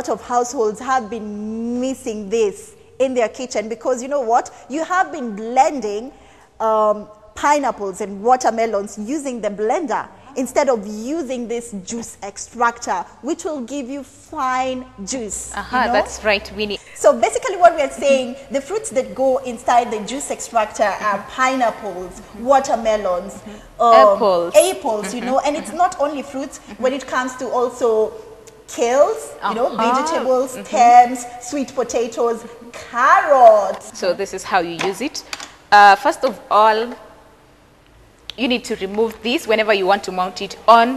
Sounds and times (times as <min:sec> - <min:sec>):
Female speech, woman speaking: 0:00.0 - 0:37.0, 0:38.3 - 0:40.9.